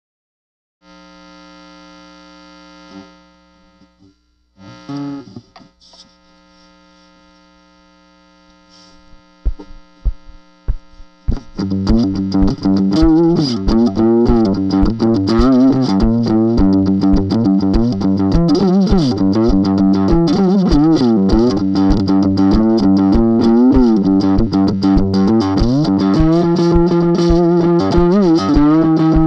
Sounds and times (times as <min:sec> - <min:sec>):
Electric guitar: 0:02.7 - 0:06.1, 0:08.6 - 0:29.2
Strum: 0:08.6 - 0:29.2
Acoustic guitar: 0:11.3 - 0:29.2.